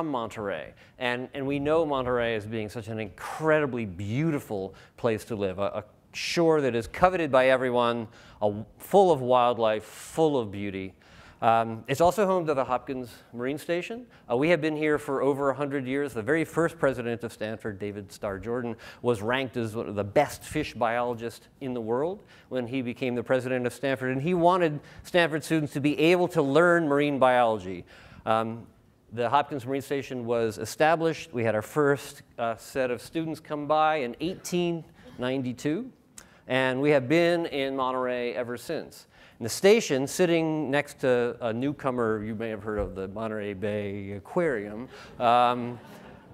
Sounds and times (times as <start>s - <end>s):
Speech: 0.0s - 45.8s.